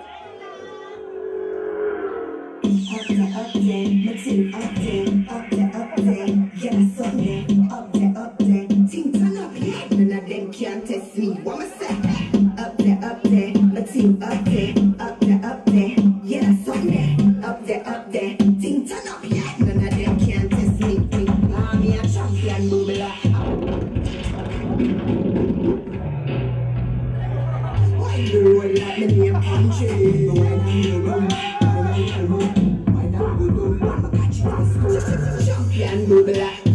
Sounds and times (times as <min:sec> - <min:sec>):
Music: 0:02.5 - 0:36.7.